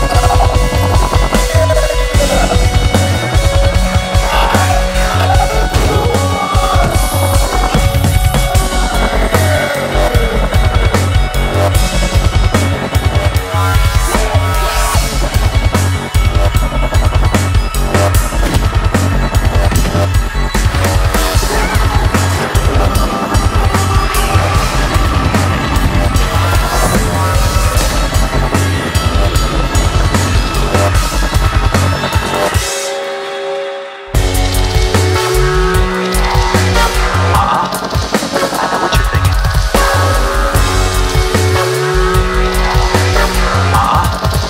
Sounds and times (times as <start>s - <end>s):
Music: 0.0s - 44.5s.